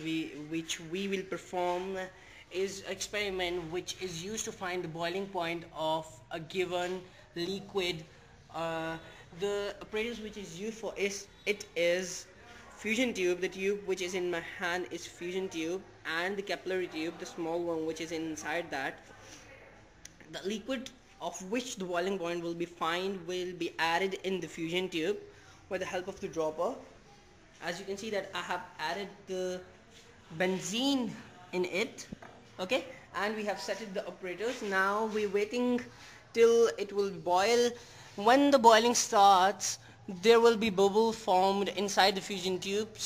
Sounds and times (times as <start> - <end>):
Speech: 0.0 - 43.0.